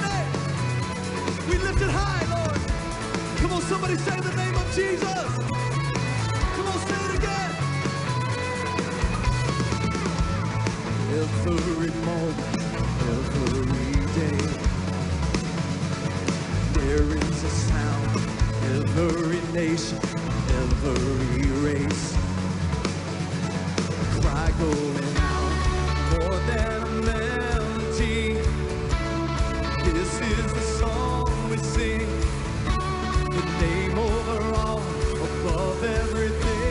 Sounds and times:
Music: 0.0 - 36.7.

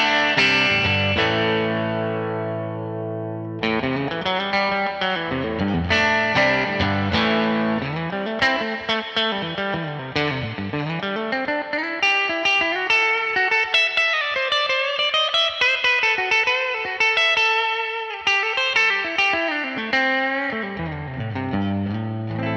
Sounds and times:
Guitar: 0.0 - 22.5
Inside, small room: 0.0 - 22.5.

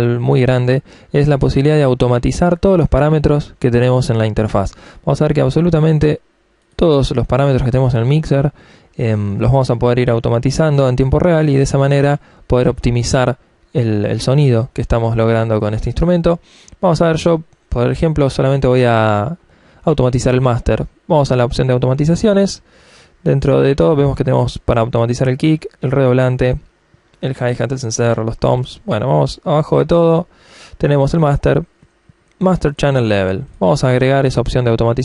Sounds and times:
Speech: 0.0 - 22.6, 23.2 - 31.8, 32.4 - 35.0.

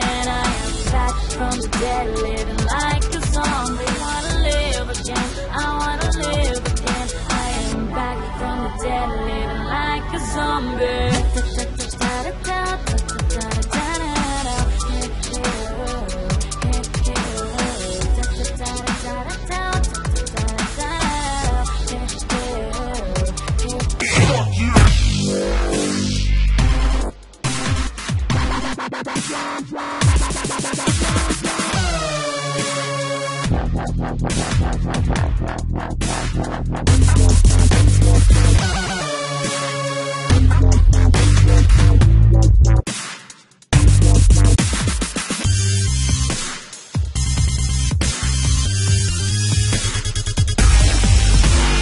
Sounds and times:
Dubstep: 0.0 - 8.5, 10.2 - 51.8.

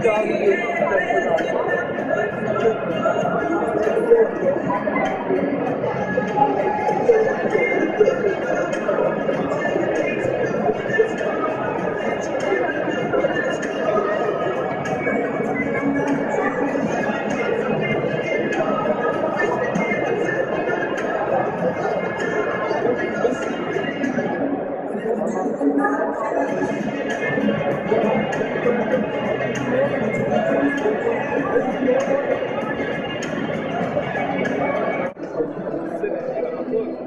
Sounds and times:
Inside, public space: 0.0 - 37.0
Music: 0.0 - 37.0
Speech: 0.0 - 37.0.

